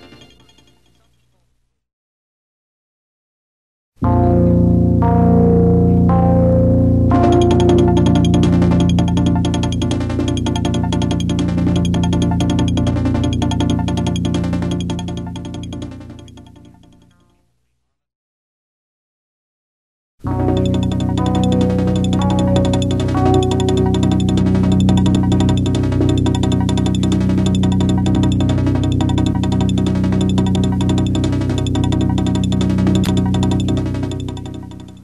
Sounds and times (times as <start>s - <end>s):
Music: 0.0s - 1.1s, 4.0s - 17.6s, 20.3s - 35.0s.